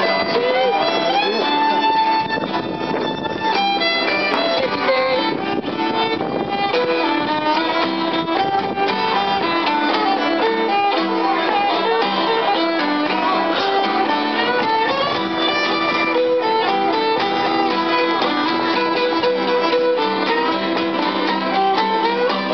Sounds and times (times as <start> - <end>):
Violin, fiddle: 0.0 - 22.5.